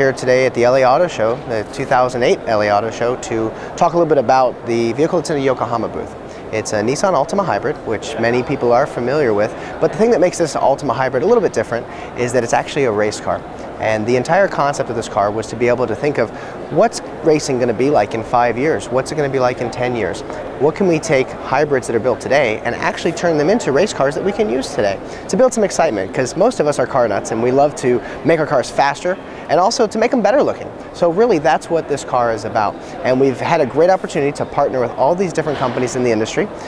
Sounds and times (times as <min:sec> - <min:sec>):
Speech: 0:00.0 - 0:36.6.